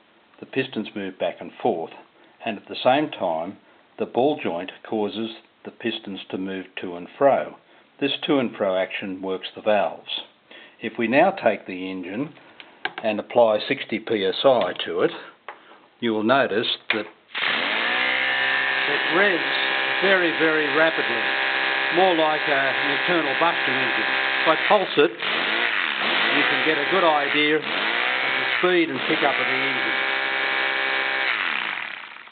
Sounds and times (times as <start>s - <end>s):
Speech: 0.4s - 12.4s, 13.0s - 15.4s, 16.0s - 17.1s, 18.9s - 21.3s, 21.9s - 25.2s, 26.3s - 27.7s, 28.6s - 30.0s
Accelerating, revving, vroom: 25.3s - 29.7s.